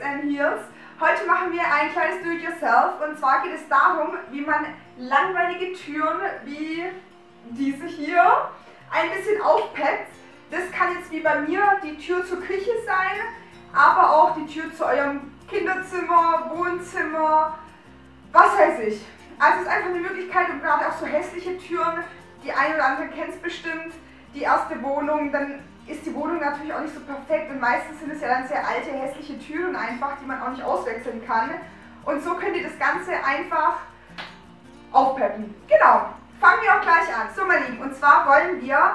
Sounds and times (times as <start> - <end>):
Speech: 0.0 - 17.6, 18.3 - 33.9, 34.9 - 38.9.